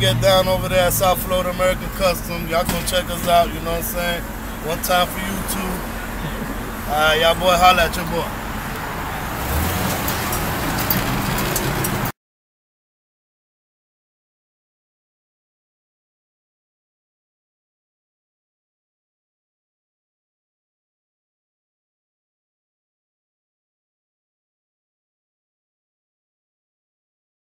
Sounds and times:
Car: 0:00.0 - 0:12.1.

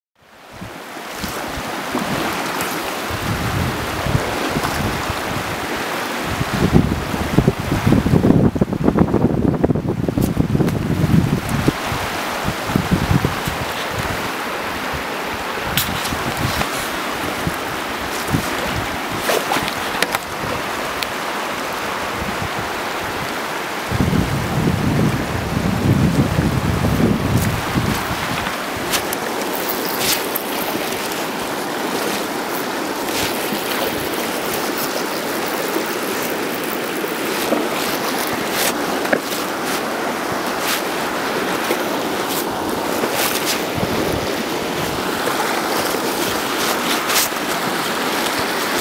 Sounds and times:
Ocean: 0:00.2 - 0:48.8
Outside, rural or natural: 0:00.2 - 0:48.8
Rustling leaves: 0:00.2 - 0:48.8.

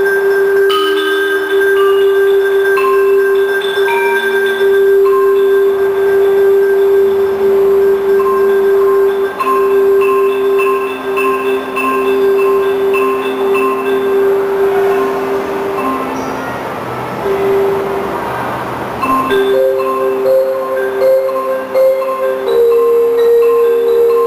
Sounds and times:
Marimba, xylophone: 0:00.0 - 0:24.2.

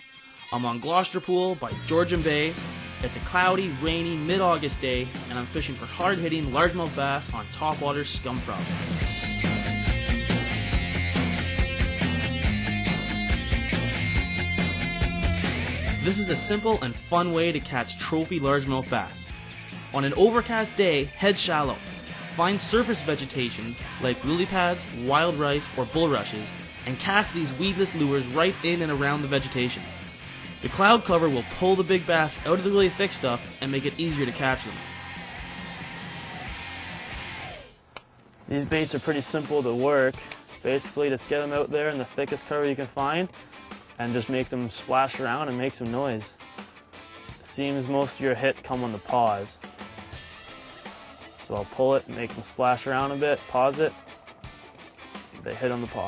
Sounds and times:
Music: 0:00.0 - 0:37.8, 0:38.5 - 0:56.0
Speech: 0:00.5 - 0:08.8, 0:16.0 - 0:19.2, 0:20.0 - 0:29.9, 0:30.6 - 0:34.8, 0:38.5 - 0:43.3, 0:44.0 - 0:46.4, 0:47.4 - 0:49.6, 0:51.4 - 0:54.0, 0:55.4 - 0:56.0.

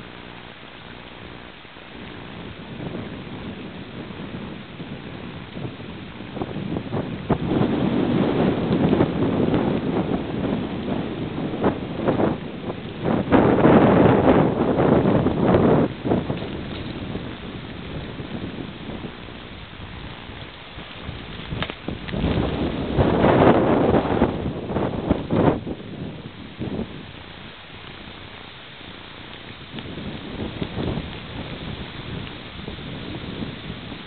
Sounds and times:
Rustling leaves: 0:00.0 - 0:34.0
Wind noise (microphone): 0:00.0 - 0:34.0.

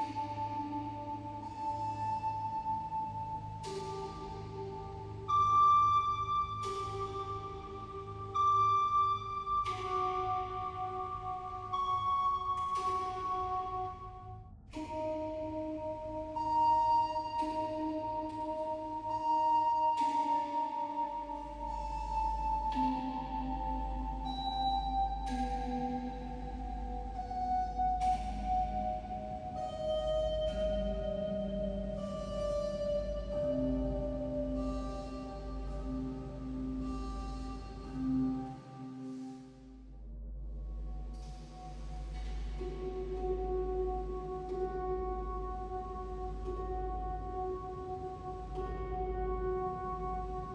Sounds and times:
Music: 0:00.0 - 0:50.5.

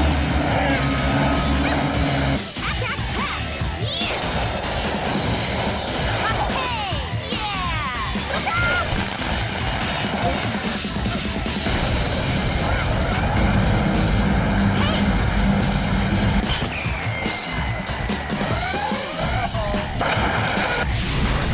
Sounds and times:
Music: 0:00.0 - 0:21.5
Speech: 0:02.6 - 0:04.2, 0:06.2 - 0:08.9, 0:14.8 - 0:15.1.

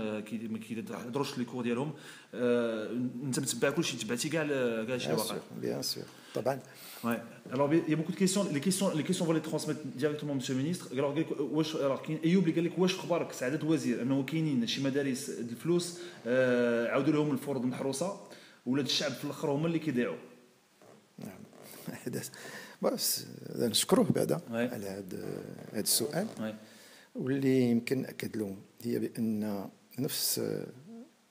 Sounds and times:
Speech: 0:00.0 - 0:20.2, 0:21.2 - 0:26.6, 0:27.2 - 0:31.0.

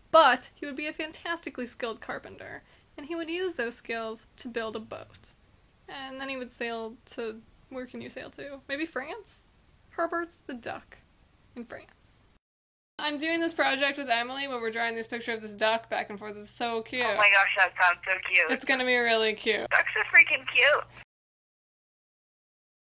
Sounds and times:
Speech: 0:00.2 - 0:09.4, 0:10.0 - 0:11.0, 0:11.6 - 0:12.0, 0:13.0 - 0:21.0.

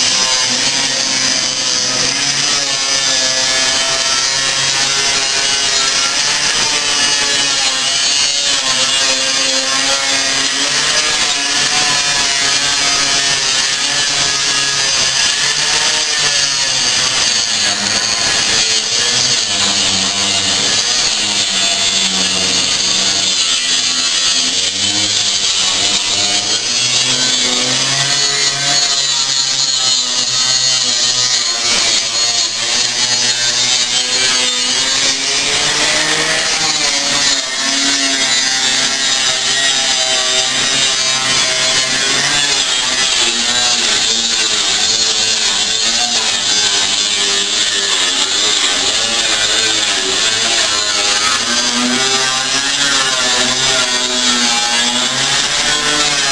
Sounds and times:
Drill: 0:00.0 - 0:56.3.

